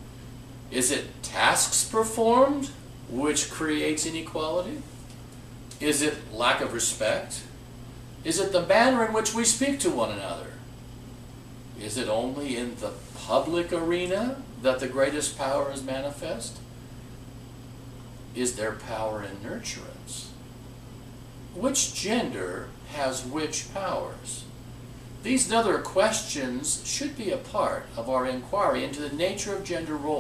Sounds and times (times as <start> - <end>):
Speech: 0.7 - 4.9, 5.8 - 7.6, 8.2 - 10.7, 11.8 - 16.7, 18.4 - 20.4, 21.6 - 24.6, 25.2 - 30.2.